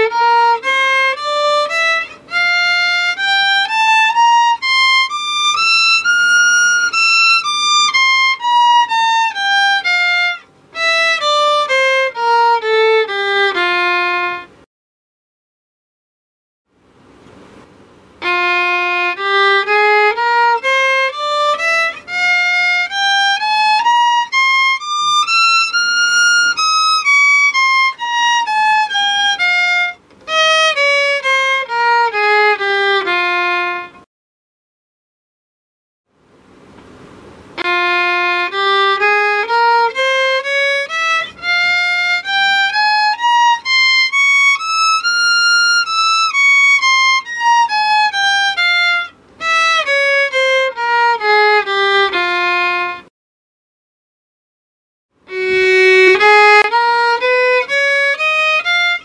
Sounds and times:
Violin, fiddle: 0:00.0 - 0:14.7, 0:18.2 - 0:34.1, 0:37.5 - 0:53.1, 0:55.2 - 0:59.0.

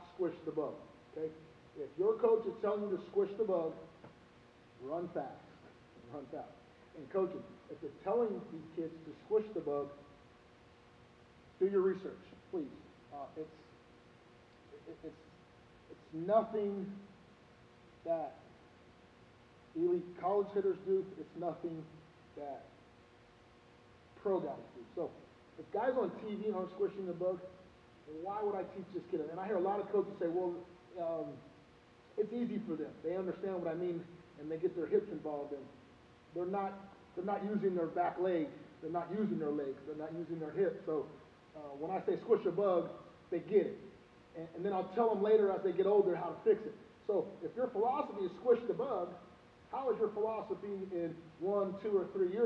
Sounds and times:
Speech: 0:00.0 - 0:04.0, 0:04.8 - 0:10.0, 0:11.6 - 0:13.7, 0:14.7 - 0:15.2, 0:15.9 - 0:17.1, 0:18.0 - 0:18.5, 0:19.8 - 0:22.8, 0:24.2 - 0:31.5, 0:32.2 - 0:52.4.

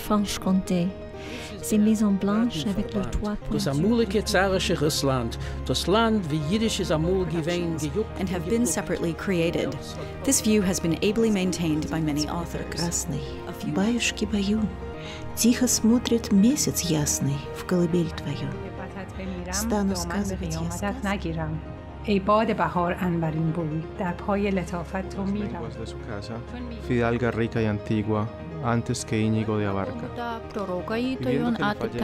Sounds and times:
Music: 0:00.0 - 0:32.0
Speech: 0:01.6 - 0:13.8, 0:19.3 - 0:21.4, 0:26.9 - 0:32.0.

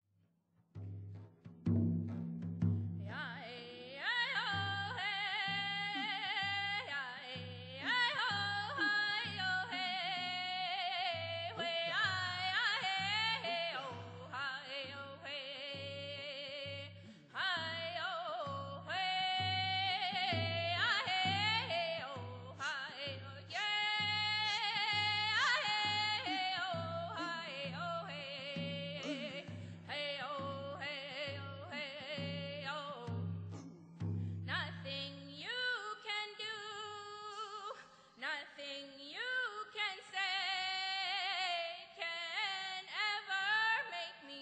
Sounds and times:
Music: 0:00.5 - 0:35.5
Female singing: 0:03.1 - 0:33.3, 0:34.5 - 0:44.4.

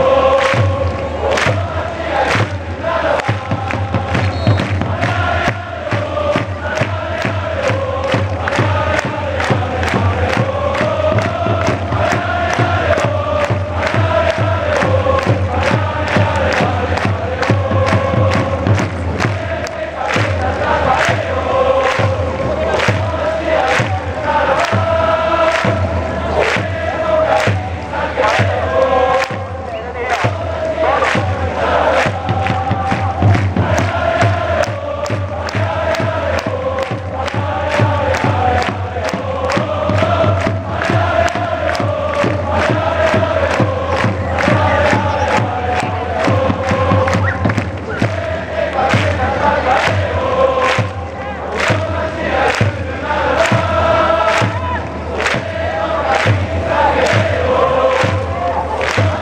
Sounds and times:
Music: 0:00.0 - 0:59.2.

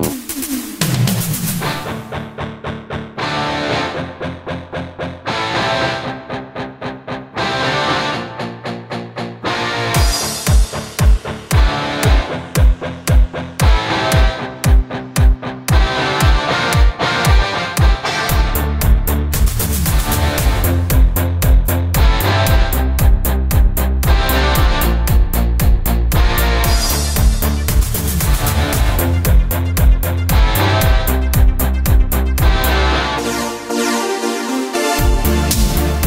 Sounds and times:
Music: 0:00.0 - 0:36.0.

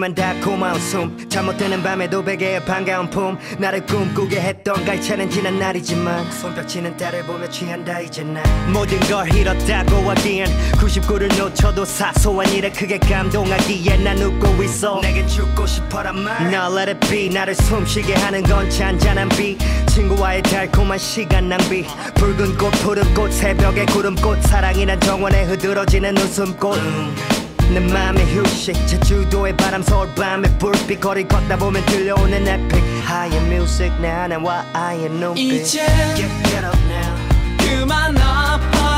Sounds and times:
Music: 0:00.0 - 0:38.9.

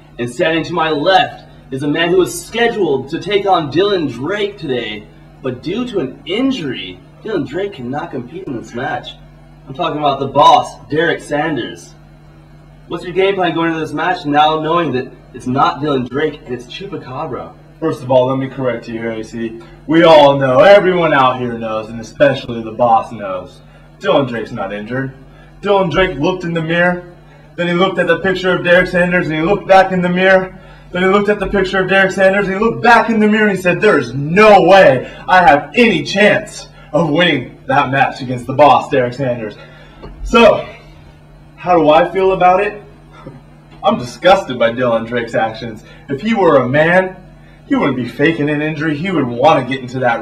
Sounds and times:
Inside, small room: 0:00.0 - 0:50.2
Speech: 0:00.2 - 0:12.0, 0:12.9 - 0:39.6, 0:40.2 - 0:41.0, 0:41.6 - 0:50.2.

